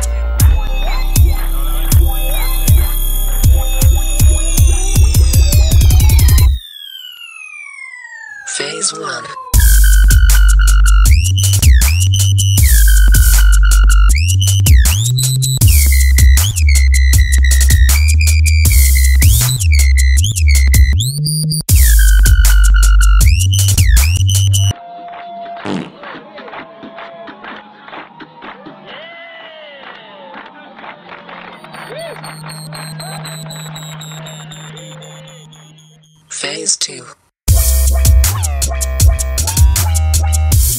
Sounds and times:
Music: 0.0 - 6.6, 9.6 - 24.7, 30.5 - 36.2, 37.5 - 40.7.

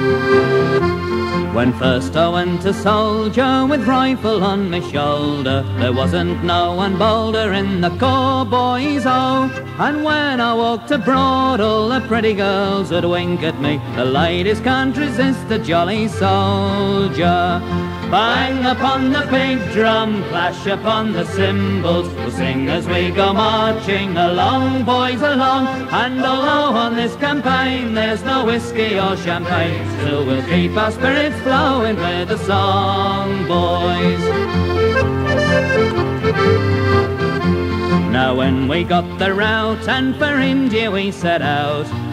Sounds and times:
Music: 0.0 - 42.1.

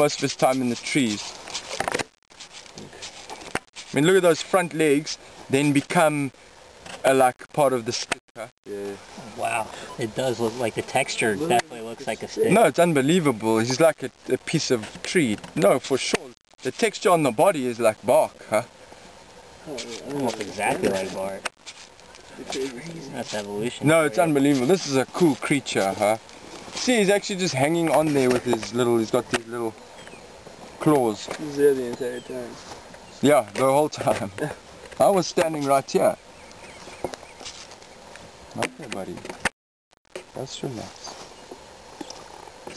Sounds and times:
Speech: 0.0 - 1.3, 3.9 - 6.3, 7.0 - 18.7, 19.7 - 21.5, 22.4 - 26.2, 26.8 - 29.8, 30.8 - 32.6, 33.2 - 36.2, 38.6 - 39.2, 40.4 - 41.2.

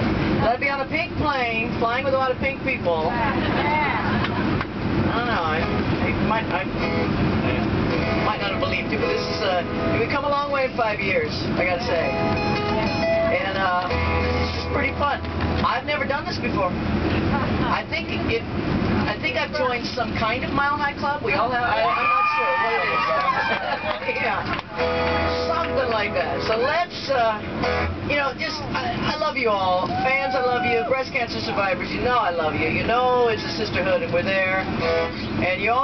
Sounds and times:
Music: 6.8 - 10.2, 11.7 - 15.7, 24.8 - 26.9, 27.5 - 28.0.

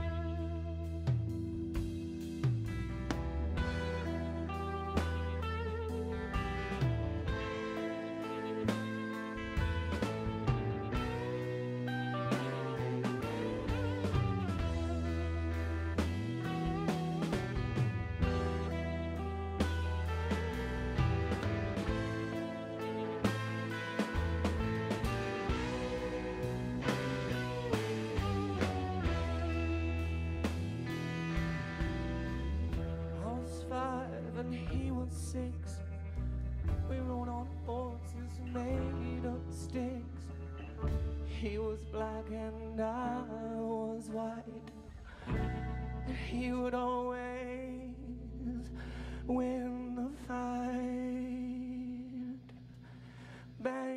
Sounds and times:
Music: 0.0 - 53.9.

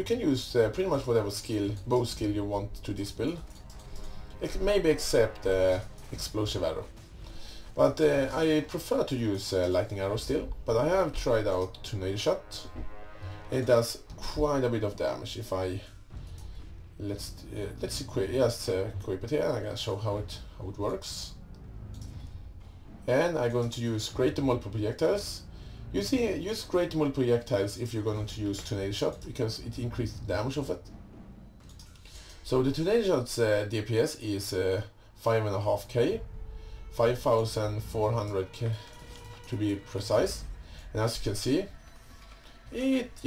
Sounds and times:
Speech: 0.0 - 3.4, 4.4 - 6.9, 7.8 - 12.7, 13.5 - 15.9, 17.0 - 21.4, 23.1 - 30.8, 32.4 - 36.2, 36.9 - 41.8, 42.7 - 43.2
Music: 0.0 - 43.2.

